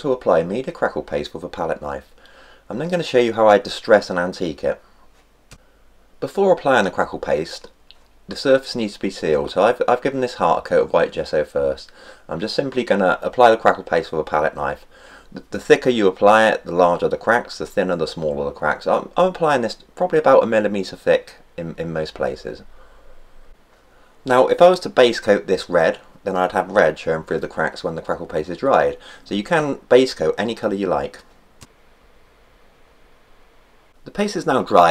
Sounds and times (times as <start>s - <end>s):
Speech: 0.0s - 2.1s, 2.7s - 4.8s, 6.2s - 22.7s, 24.2s - 31.3s, 34.0s - 34.9s.